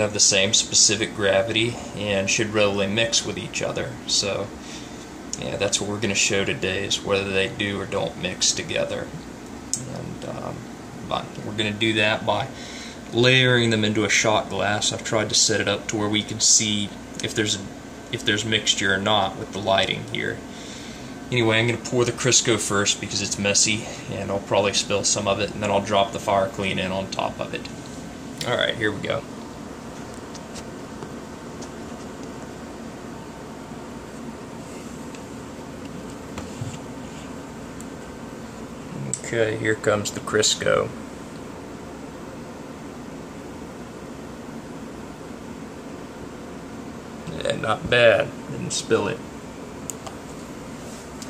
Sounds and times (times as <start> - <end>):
Speech: 0.0 - 4.6, 5.4 - 9.2, 9.8 - 20.4, 21.3 - 27.7, 28.4 - 29.3, 38.9 - 41.0, 47.3 - 49.3
Inside, small room: 0.0 - 51.2.